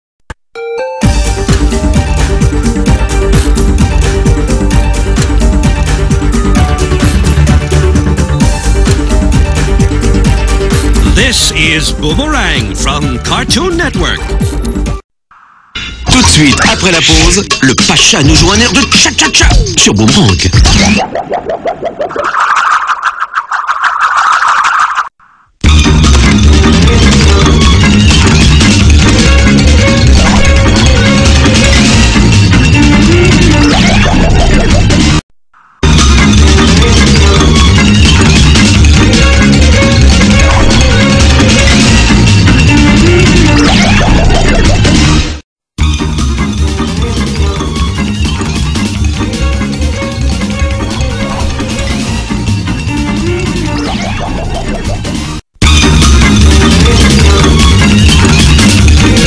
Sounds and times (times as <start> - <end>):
Music: 0.6 - 15.0, 15.8 - 20.6, 25.6 - 35.2, 35.8 - 59.2.